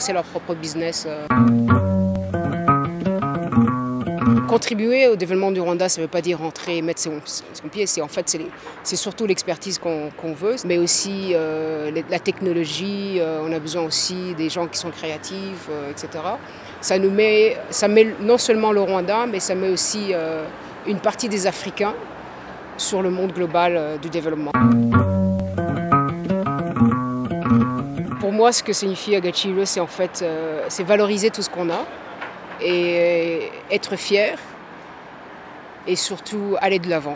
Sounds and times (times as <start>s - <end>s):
Speech: 0.0s - 1.3s, 4.5s - 22.1s, 22.8s - 24.6s, 28.2s - 32.0s, 32.6s - 34.5s, 35.9s - 37.1s
Music: 1.3s - 4.6s, 24.6s - 28.3s.